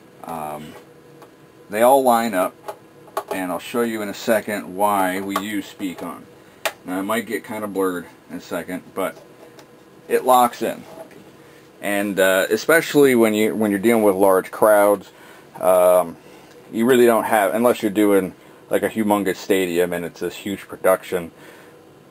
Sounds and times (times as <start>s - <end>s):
Speech: 0.2s - 0.8s, 1.7s - 2.6s, 3.3s - 9.2s, 10.1s - 10.9s, 11.8s - 21.4s.